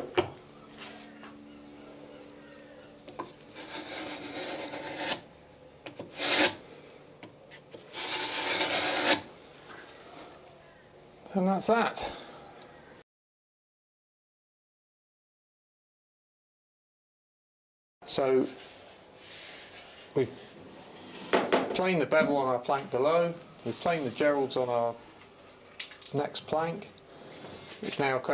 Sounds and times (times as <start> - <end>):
Filing (rasp): 3.5 - 5.3, 5.9 - 6.6, 7.9 - 9.3
Rub: 3.6 - 5.2, 7.9 - 9.2.